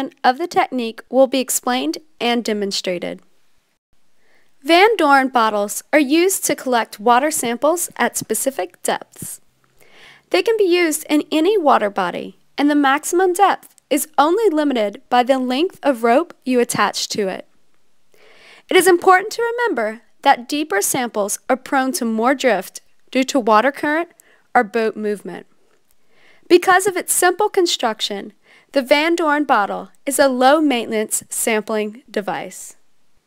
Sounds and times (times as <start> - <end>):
Speech: 0.0 - 3.2, 4.6 - 9.4, 10.3 - 17.5, 18.7 - 25.5, 26.5 - 32.8.